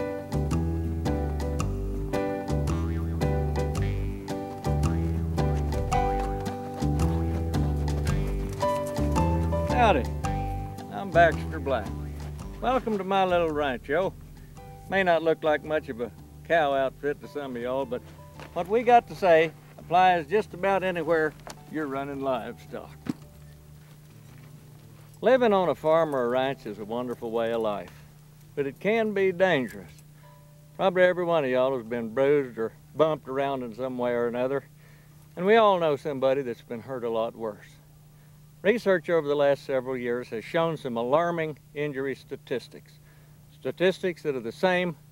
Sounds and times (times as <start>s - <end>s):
Speech: 9.7s - 10.1s, 10.9s - 14.2s, 14.9s - 23.0s, 25.2s - 28.0s, 28.6s - 30.0s, 30.8s - 34.7s, 35.4s - 37.8s, 38.6s - 43.0s, 43.6s - 45.0s.